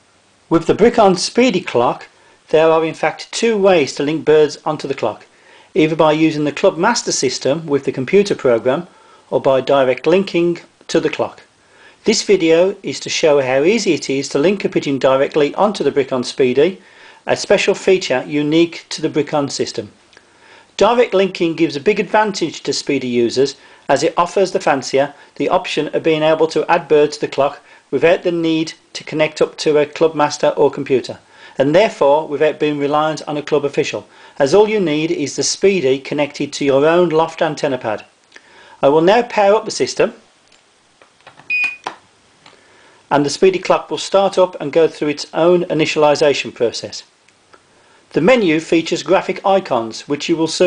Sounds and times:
Speech: 0.5 - 20.0, 20.8 - 38.1, 38.8 - 40.2, 43.1 - 47.1, 48.1 - 50.6.

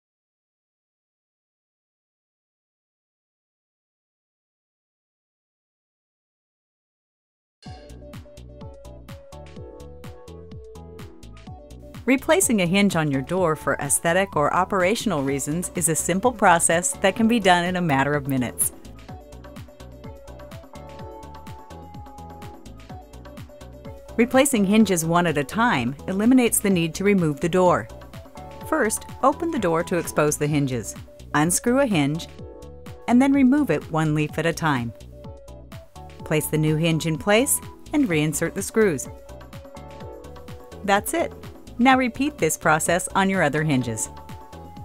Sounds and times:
Music: 7.6 - 44.8
Speech: 12.1 - 18.7, 24.2 - 27.9, 28.7 - 32.3, 33.1 - 34.9, 36.2 - 39.1, 40.8 - 44.1.

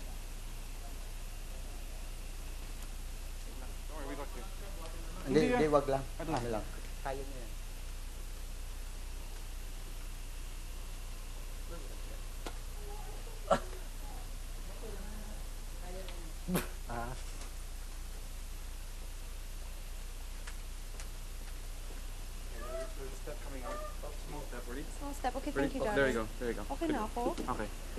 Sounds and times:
Speech: 3.5 - 7.5, 22.6 - 27.9.

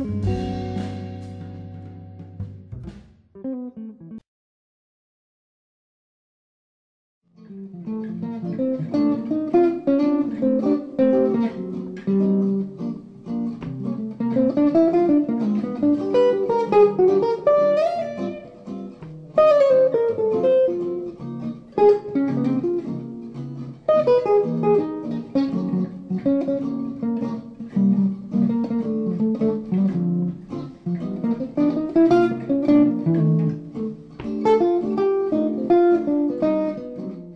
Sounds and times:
Acoustic guitar: 0.0 - 3.0, 7.8 - 37.3.

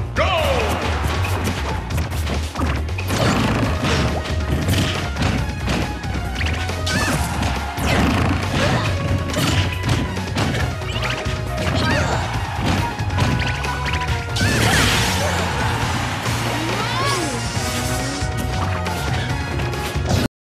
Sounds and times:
Whack, thwack: 0.7 - 5.9, 7.9 - 10.7.

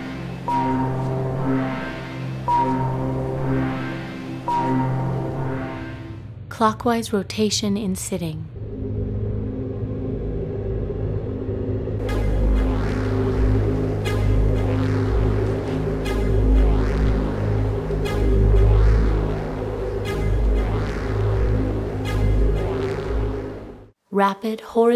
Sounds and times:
Music: 0.0 - 6.6, 8.5 - 24.0.

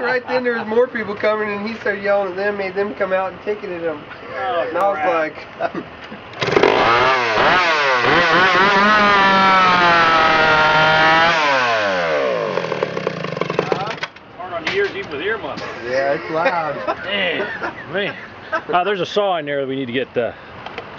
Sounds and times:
Chainsaw: 6.4 - 14.0.

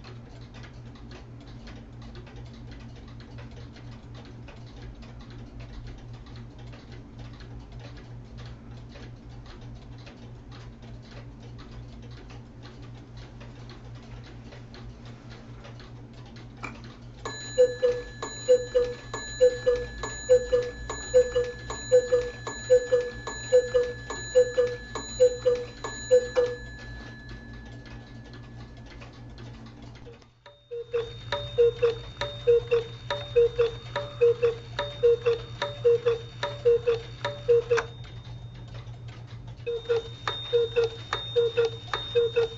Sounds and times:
Clock: 0.0 - 42.5.

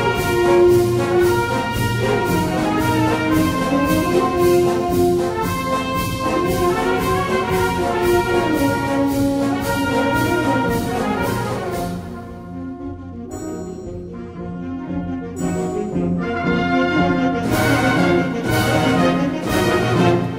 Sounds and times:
French horn: 0.0 - 20.3
Trombone: 0.0 - 20.3
Trumpet: 0.0 - 20.3.

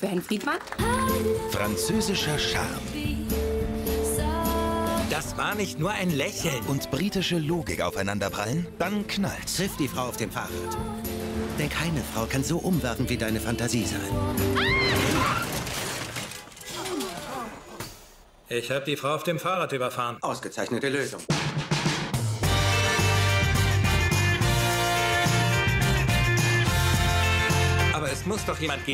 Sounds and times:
Music: 0.7 - 15.1, 21.3 - 28.9
Speech: 1.6 - 2.8, 5.1 - 10.8, 11.6 - 14.1, 18.5 - 21.3, 28.0 - 28.9.

